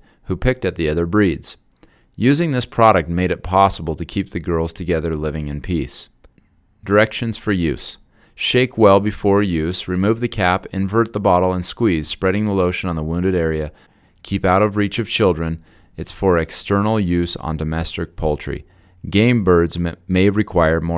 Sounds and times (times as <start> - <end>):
Speech: 0.3 - 1.6, 2.2 - 6.2, 6.8 - 20.9.